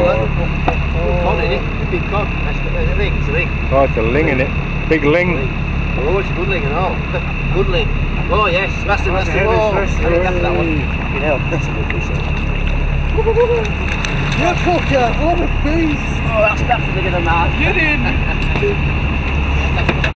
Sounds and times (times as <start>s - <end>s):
Speech: 0.0s - 12.3s.